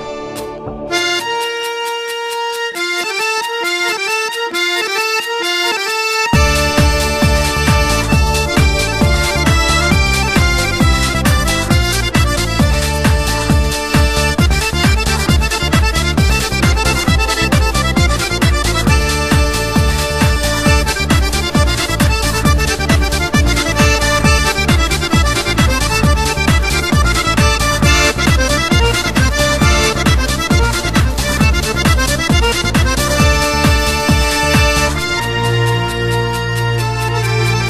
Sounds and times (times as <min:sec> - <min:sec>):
Dance music: 0:00.0 - 0:37.7.